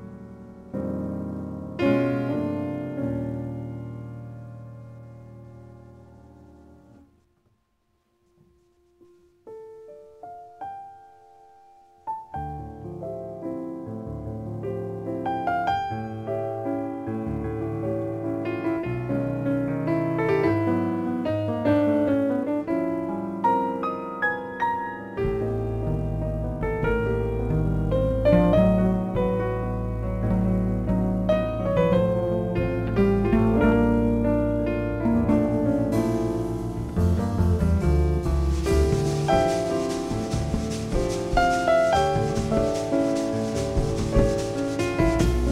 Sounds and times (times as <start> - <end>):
Piano: 0.0 - 45.5.